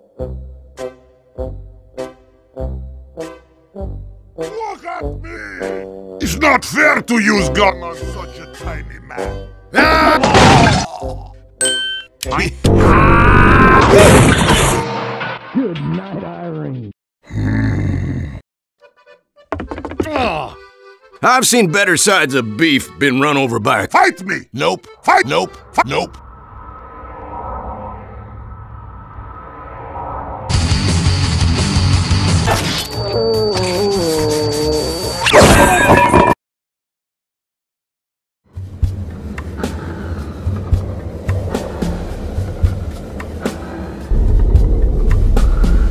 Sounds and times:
Smash, crash: 10.2 - 10.9, 13.8 - 15.6
Sound effect: 12.6 - 16.9, 26.1 - 36.4.

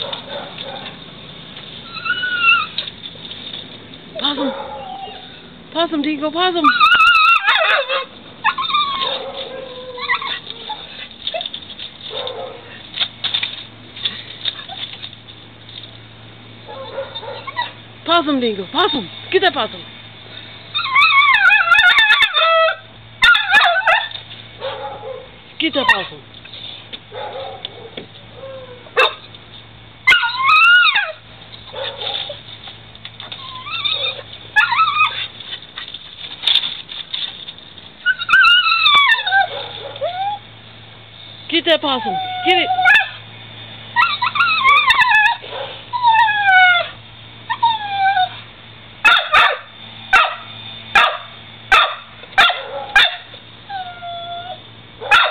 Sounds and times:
Yip: 6.6 - 11.5, 16.7 - 17.8, 20.8 - 26.1, 27.2 - 29.2, 49.0 - 55.3.

